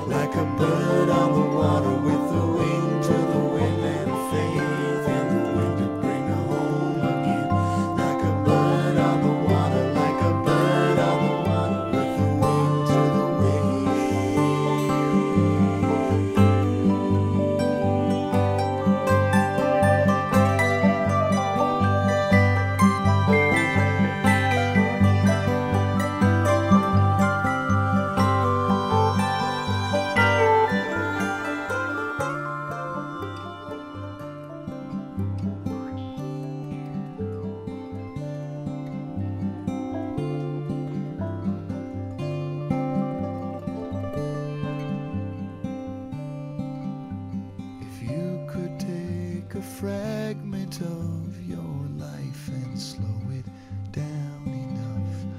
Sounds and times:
Music: 0.0 - 55.3.

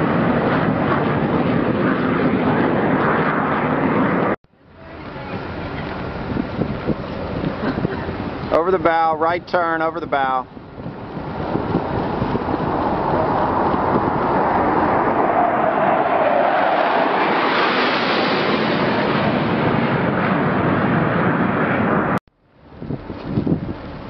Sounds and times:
Wind noise (microphone): 0.0 - 4.4, 5.3 - 24.0.

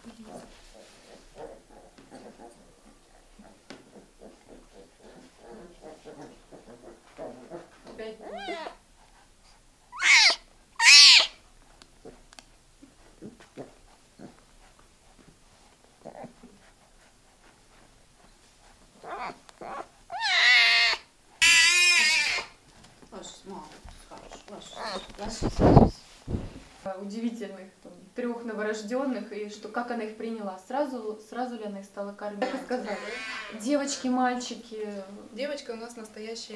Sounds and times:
Yip: 10.0 - 11.4.

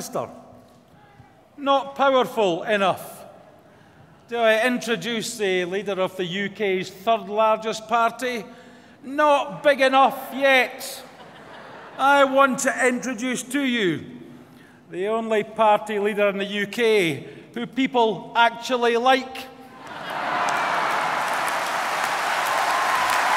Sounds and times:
Male speech, man speaking: 0.0 - 0.4, 1.6 - 3.3, 4.3 - 11.1, 12.0 - 14.1, 14.9 - 19.6
Narration, monologue: 0.0 - 19.8.

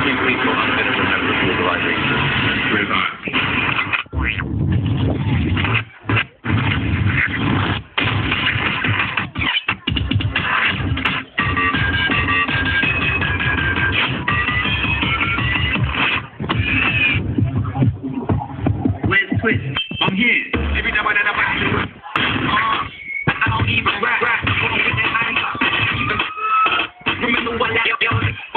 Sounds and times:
Speech: 0.0 - 3.2, 19.0 - 22.2, 27.1 - 28.5
Music: 0.0 - 28.5.

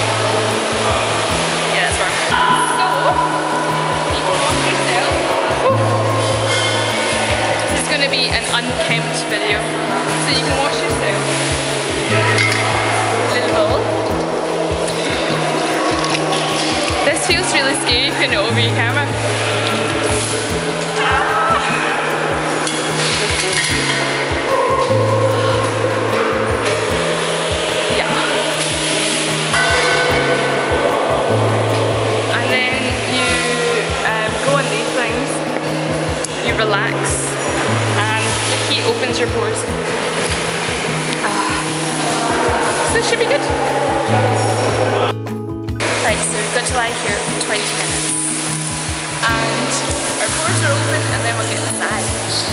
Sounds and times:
Music: 0.0 - 52.5
Speech: 1.7 - 3.3, 4.0 - 6.0, 7.6 - 11.3, 13.2 - 13.9, 17.0 - 19.2, 27.9 - 28.5, 32.3 - 35.6, 36.4 - 39.8, 41.2 - 44.6, 46.0 - 48.1, 49.2 - 52.5.

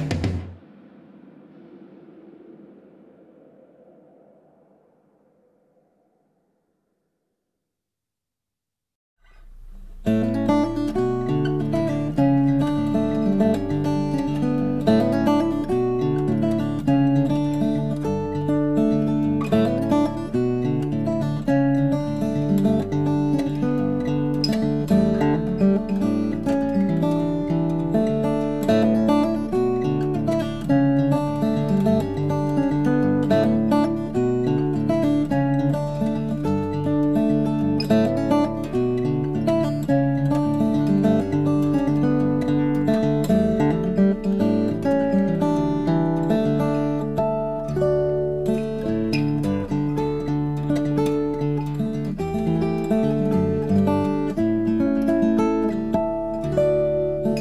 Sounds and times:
Guitar: 0.0 - 5.9, 9.2 - 57.4.

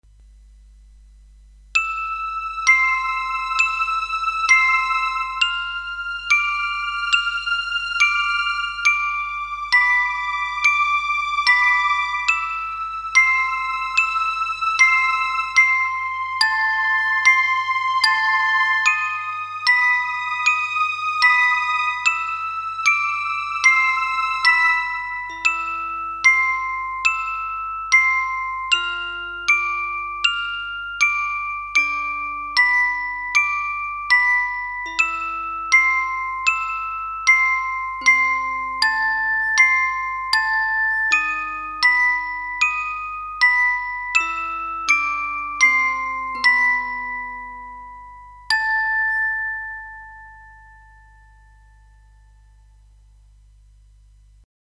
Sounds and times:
Musical instrument: 1.8 - 52.5.

